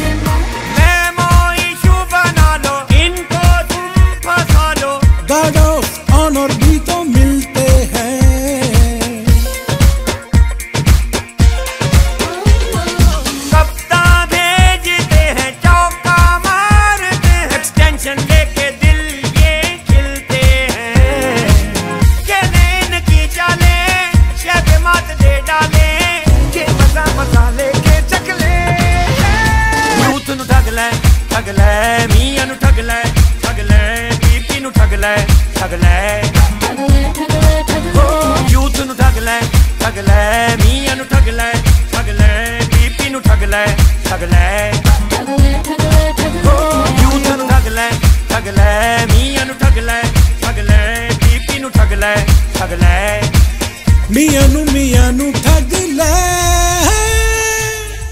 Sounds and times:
Music: 0.0s - 58.1s
Singing: 0.0s - 58.1s.

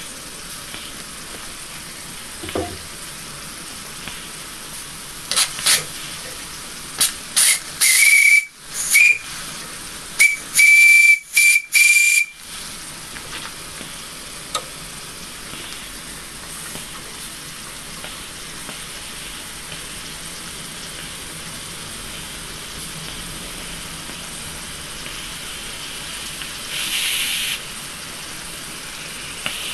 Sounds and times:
Hiss: 3.9s - 12.8s, 22.0s - 29.7s
Steam whistle: 7.4s - 9.4s, 10.2s - 12.4s.

